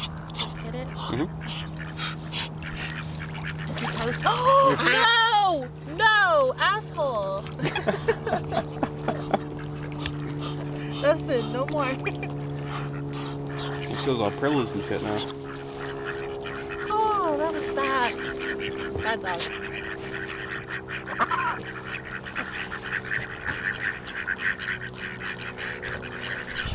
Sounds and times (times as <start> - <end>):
Quack: 0.0 - 5.4, 9.2 - 26.7.